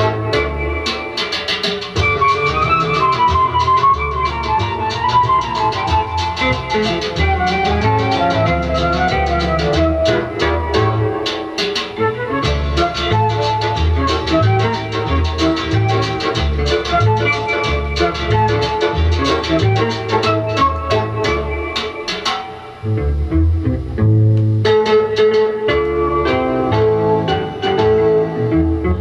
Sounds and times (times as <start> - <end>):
Background music: 0.0 - 29.0.